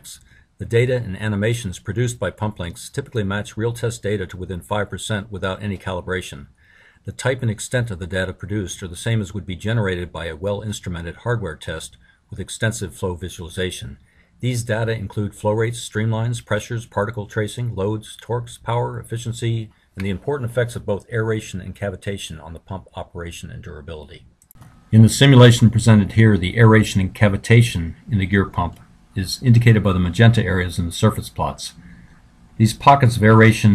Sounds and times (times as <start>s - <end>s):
Speech: 0.0s - 6.5s, 7.1s - 24.3s, 24.9s - 31.8s, 32.6s - 33.7s.